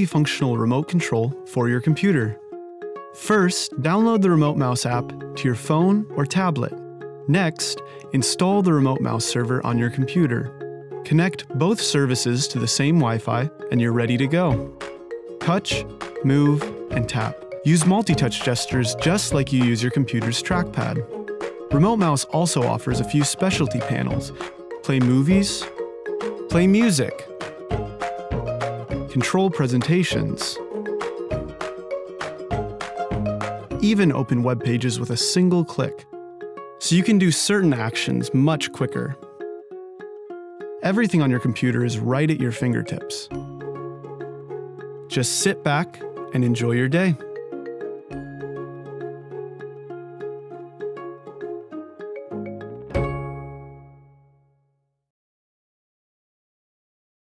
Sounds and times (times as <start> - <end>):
Speech: 0.0 - 2.4, 3.2 - 10.5, 11.1 - 14.6, 15.4 - 21.1, 21.7 - 25.7, 26.5 - 27.3, 29.1 - 30.6, 33.8 - 36.1, 36.8 - 39.2, 40.8 - 43.3, 45.1 - 47.2
Music: 0.0 - 55.0.